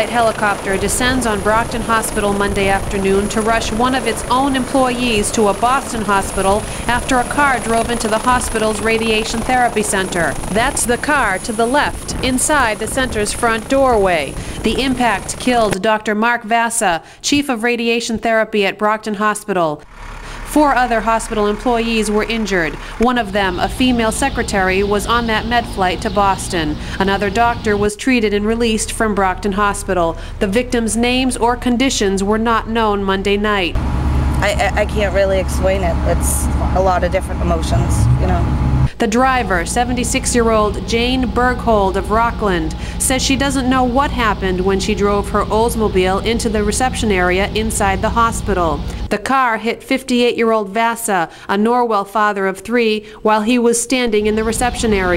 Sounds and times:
Speech: 0.0s - 19.8s, 20.5s - 33.8s, 34.4s - 55.1s
Vehicle: 19.8s - 27.9s, 33.8s - 49.1s.

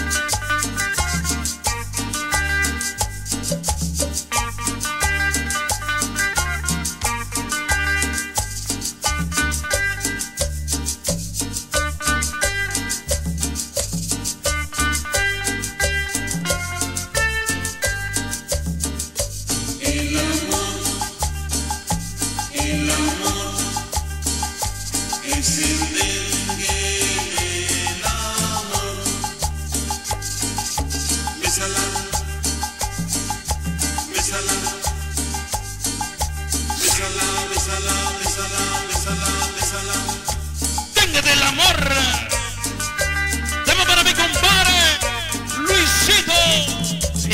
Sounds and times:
Music: 0.0s - 47.3s.

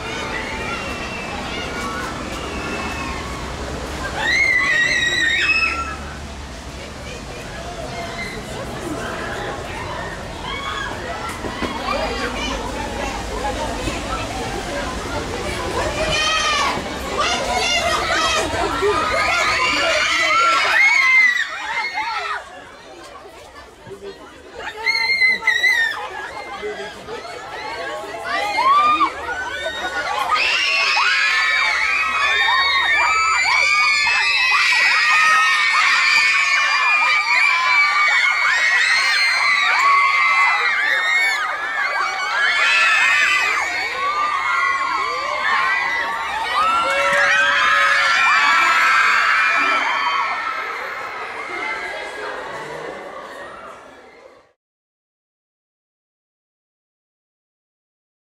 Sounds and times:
Speech: 0.0s - 54.6s.

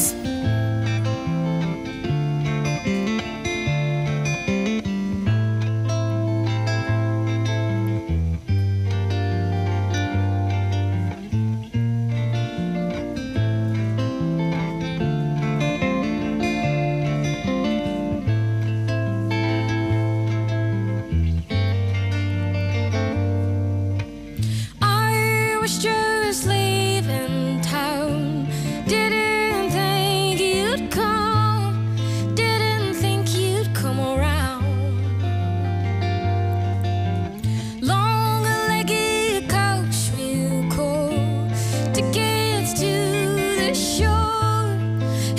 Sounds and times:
Music: 0.0s - 45.3s.

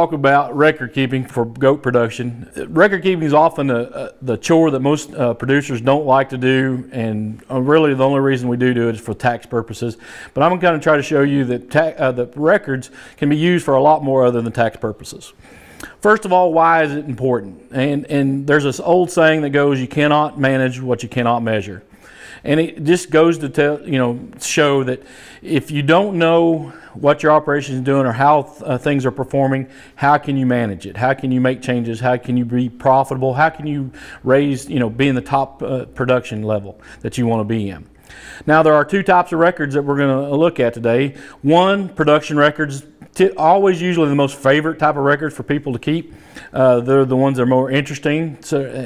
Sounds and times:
Speech: 0.0s - 15.4s, 16.0s - 37.9s, 38.5s - 48.8s.

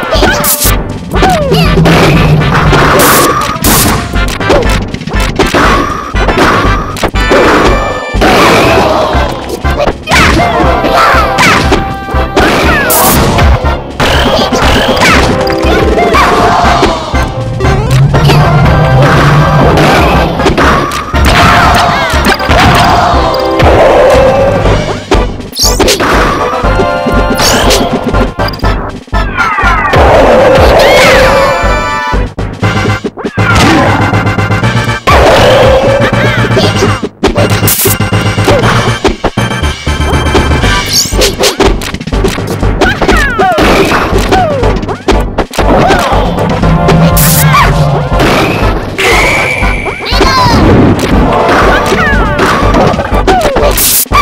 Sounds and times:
Smash, crash: 0.1s - 26.6s, 32.7s - 34.4s, 35.1s - 54.2s.

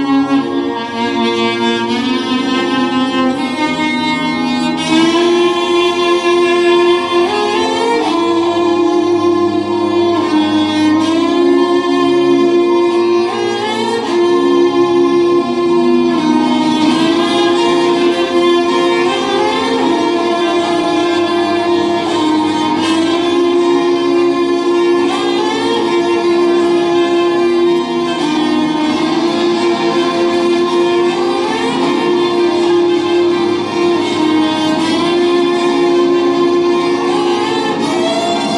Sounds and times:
Violin, fiddle: 0.0s - 38.5s.

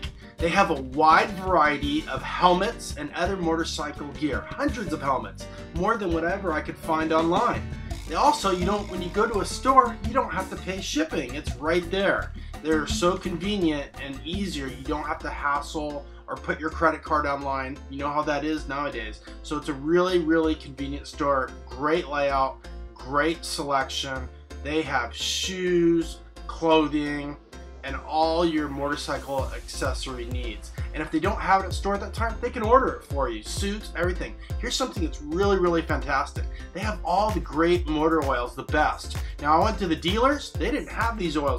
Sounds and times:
Music: 0.0s - 41.5s
Speech: 0.0s - 41.5s.

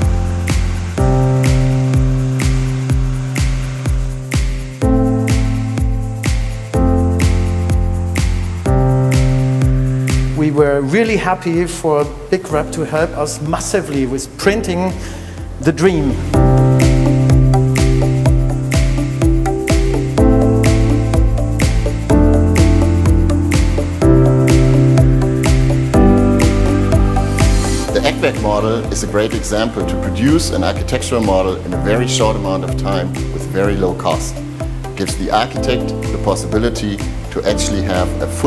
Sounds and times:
Music: 0.0s - 38.4s
Speech: 10.4s - 15.0s, 15.6s - 16.4s, 27.9s - 34.4s, 35.0s - 38.4s.

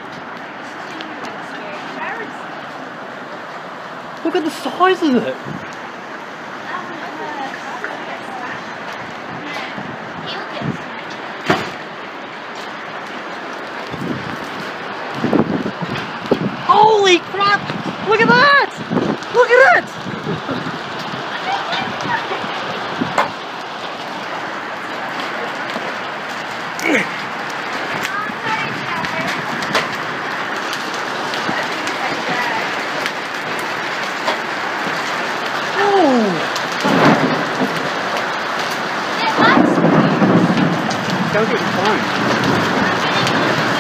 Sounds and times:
Raindrop: 0.0s - 43.8s.

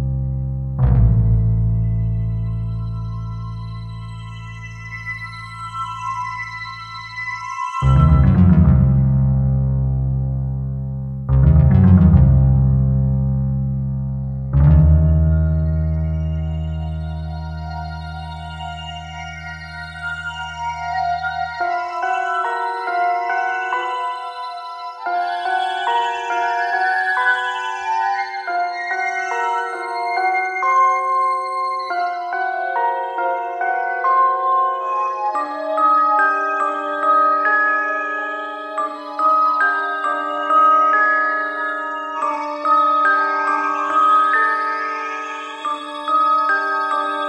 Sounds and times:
Music: 0.0s - 47.2s.

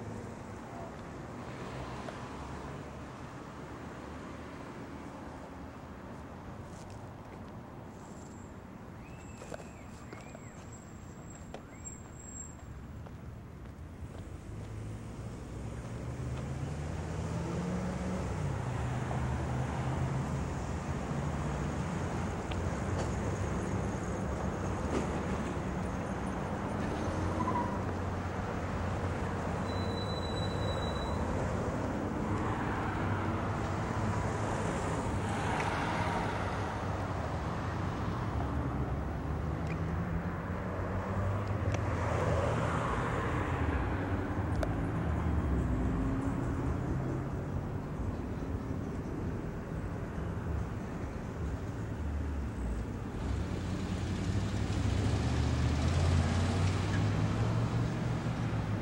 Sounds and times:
Car: 0.0s - 58.8s.

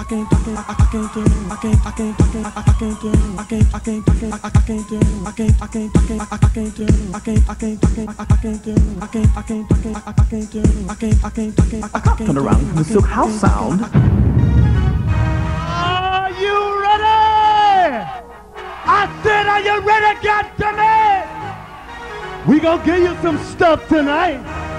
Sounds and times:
House music: 0.0s - 14.0s
Speech: 12.1s - 13.9s, 22.4s - 24.4s.

